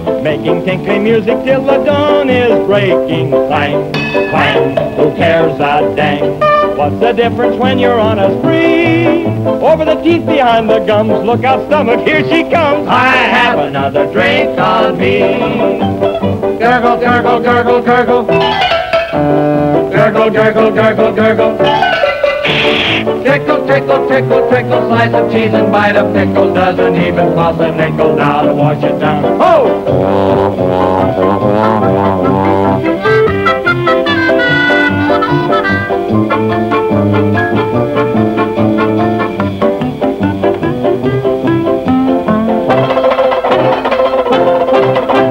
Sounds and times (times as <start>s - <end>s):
Music: 0.0s - 45.3s.